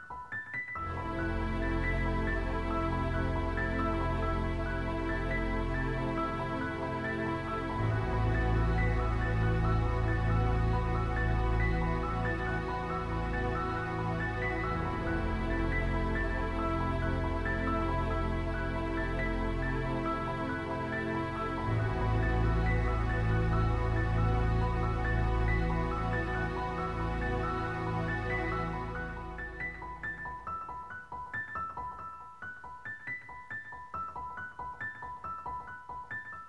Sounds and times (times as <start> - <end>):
Music: 0.0 - 36.4.